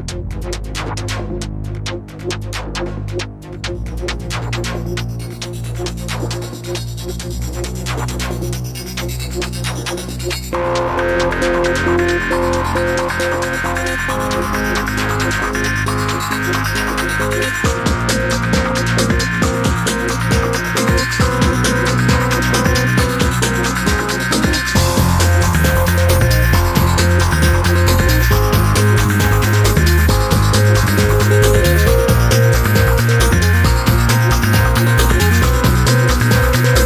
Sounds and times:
Music: 0.0s - 36.8s.

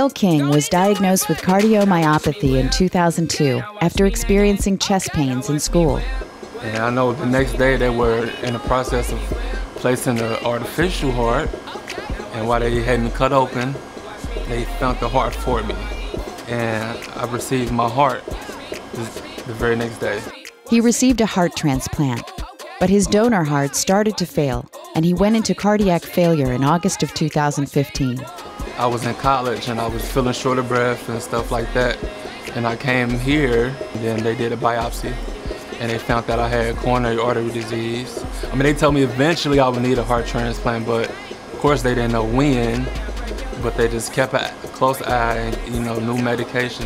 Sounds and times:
Speech: 0.0s - 11.5s, 12.3s - 13.8s, 14.5s - 18.2s, 19.0s - 35.2s, 35.8s - 43.0s, 43.6s - 46.8s
Music: 0.0s - 46.8s.

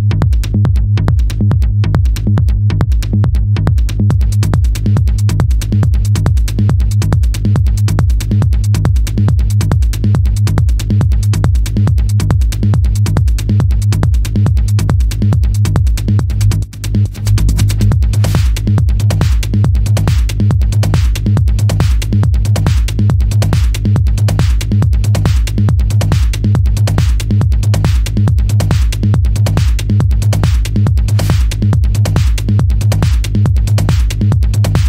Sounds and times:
Music: 0.0s - 34.8s.

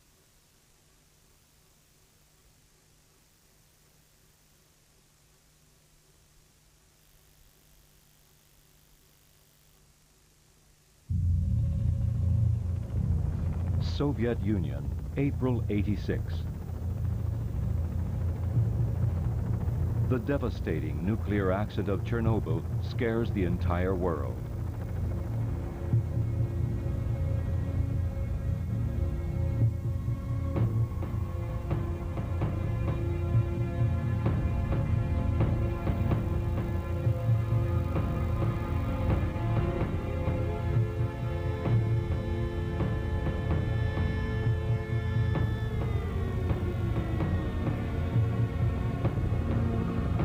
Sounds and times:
Speech: 13.8s - 16.5s, 20.1s - 24.4s.

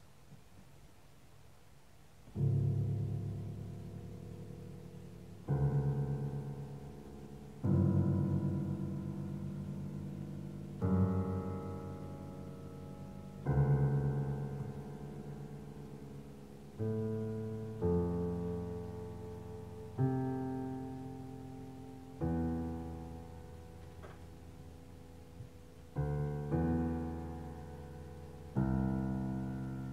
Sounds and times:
Piano: 0.0s - 29.9s.

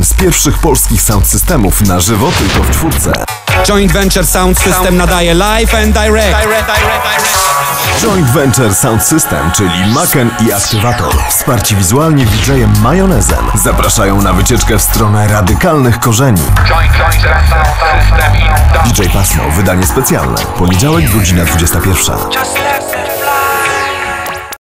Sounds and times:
Speech: 0.0s - 7.0s, 7.9s - 22.6s
Music: 0.0s - 24.6s.

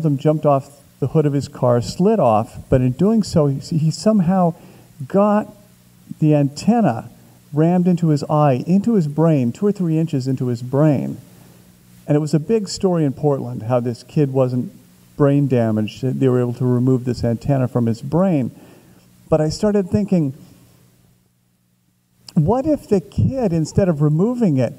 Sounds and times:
Speech: 0.0s - 11.2s, 12.1s - 18.6s, 19.3s - 20.4s, 22.3s - 24.7s.

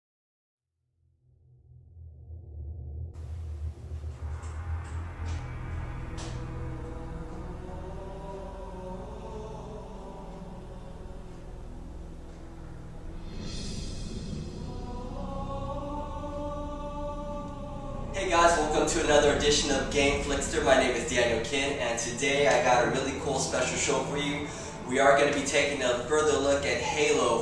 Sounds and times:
Music: 2.1s - 27.4s
Inside, small room: 3.1s - 27.4s.

